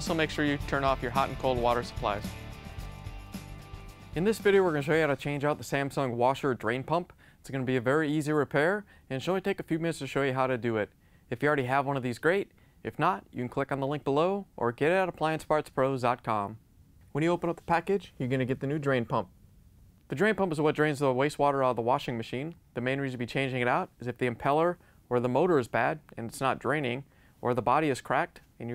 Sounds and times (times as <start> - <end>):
Speech: 0.0 - 2.3, 4.2 - 16.6, 17.2 - 19.3, 20.1 - 28.7.